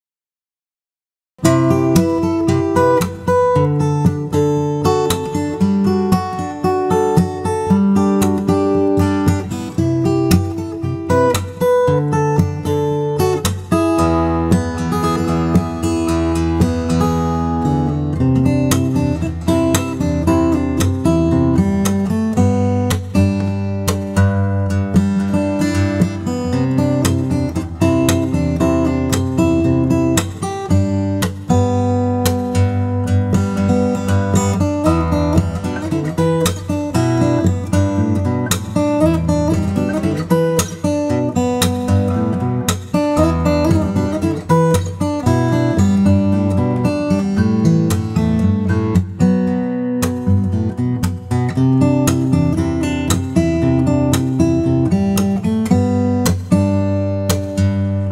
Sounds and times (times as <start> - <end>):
Acoustic guitar: 1.4 - 58.1.